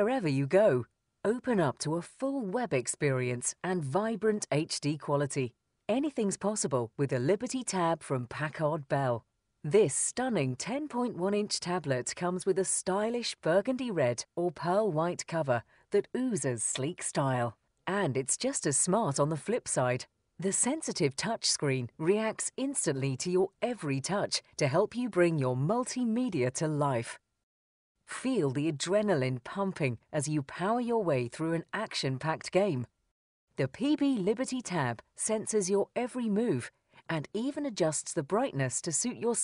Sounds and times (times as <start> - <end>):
Speech: 0.0 - 27.2, 28.1 - 32.9, 33.6 - 39.4.